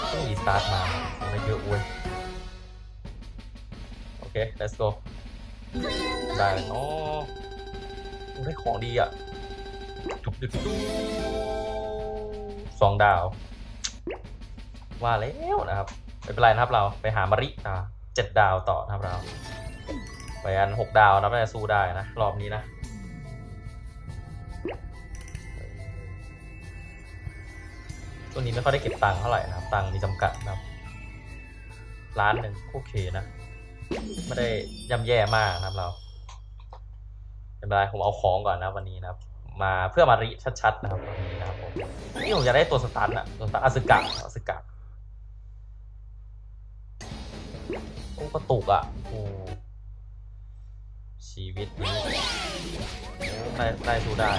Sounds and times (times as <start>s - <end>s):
Speech: 0.0s - 1.9s, 4.3s - 5.0s, 6.3s - 7.3s, 8.4s - 9.1s, 10.3s - 10.7s, 12.8s - 13.4s, 15.0s - 19.3s, 20.5s - 22.6s, 28.4s - 30.6s, 32.2s - 33.3s, 34.3s - 36.0s, 37.6s - 44.6s, 48.2s - 49.6s, 51.2s - 52.1s, 53.5s - 54.3s
Music: 0.0s - 36.5s, 40.1s - 44.3s, 47.0s - 49.7s, 51.4s - 54.3s.